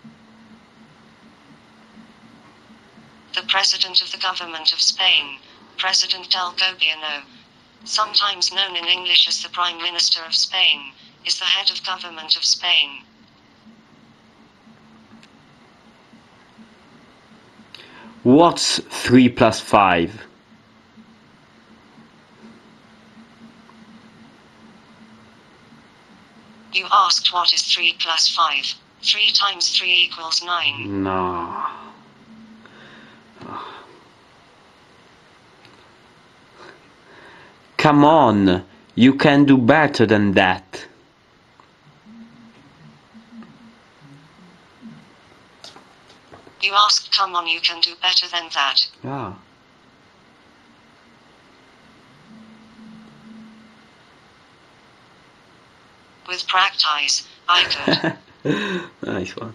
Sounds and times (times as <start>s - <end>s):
Speech: 3.4s - 7.3s, 7.9s - 13.1s, 18.2s - 20.3s, 26.8s - 31.6s, 37.8s - 40.9s, 46.6s - 49.4s, 56.3s - 59.5s.